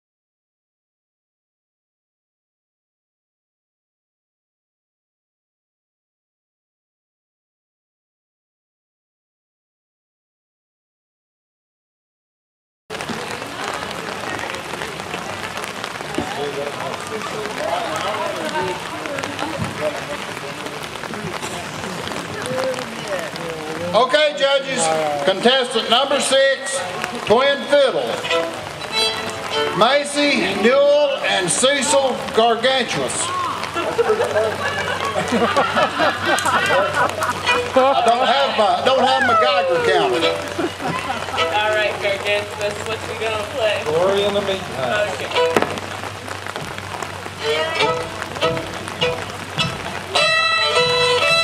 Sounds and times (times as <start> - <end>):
Speech: 12.9 - 28.3, 37.7 - 46.1
Bluegrass: 13.0 - 51.4.